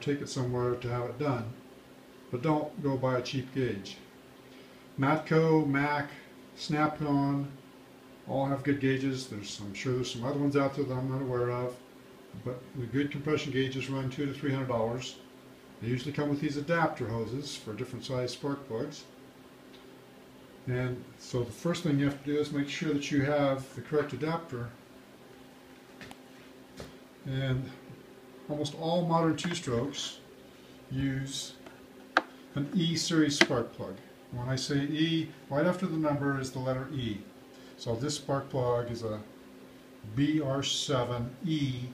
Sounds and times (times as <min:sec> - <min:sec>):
Speech: 0:00.0 - 0:01.6, 0:02.3 - 0:04.1, 0:05.0 - 0:07.6, 0:08.3 - 0:11.8, 0:12.4 - 0:19.2, 0:20.6 - 0:24.8, 0:27.2 - 0:27.9, 0:28.5 - 0:30.3, 0:30.9 - 0:31.7, 0:32.6 - 0:39.3, 0:40.0 - 0:41.9.